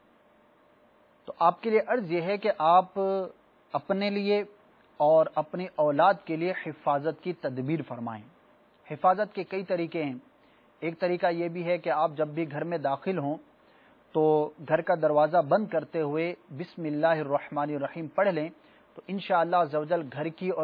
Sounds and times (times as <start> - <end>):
Speech: 1.3 - 8.3, 8.9 - 10.2, 10.8 - 13.4, 14.2 - 20.6.